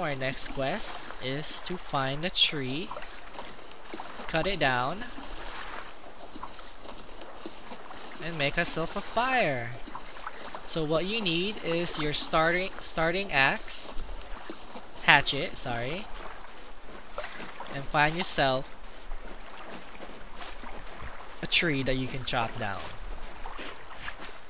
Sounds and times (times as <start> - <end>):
Speech: 0.0 - 3.0, 4.3 - 5.1, 8.2 - 9.8, 10.7 - 14.0, 15.1 - 16.1, 17.7 - 18.7, 21.4 - 23.0.